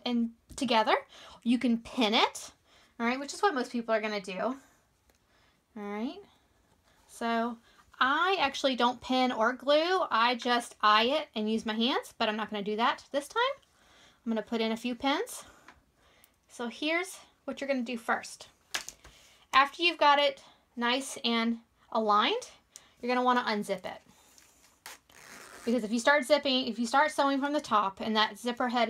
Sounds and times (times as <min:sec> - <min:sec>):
Speech: 0:00.0 - 0:04.6, 0:05.8 - 0:06.3, 0:07.2 - 0:13.6, 0:14.3 - 0:15.4, 0:16.6 - 0:18.5, 0:19.6 - 0:24.0, 0:25.7 - 0:28.9.